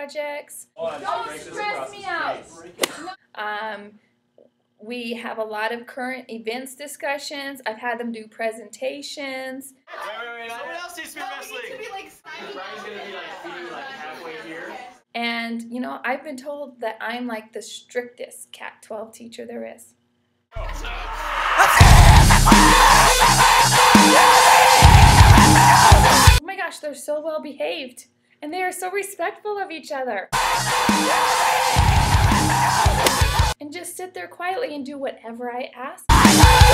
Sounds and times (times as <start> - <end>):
Speech: 0.0 - 4.0, 4.8 - 19.9, 20.6 - 21.4, 26.4 - 30.3, 33.6 - 36.1.